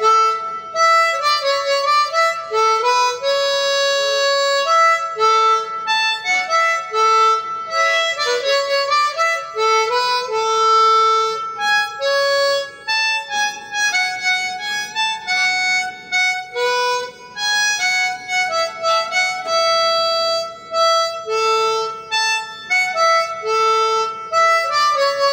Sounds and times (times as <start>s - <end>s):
Harmonica: 0.0s - 25.3s
Wind instrument, woodwind instrument: 0.0s - 25.3s.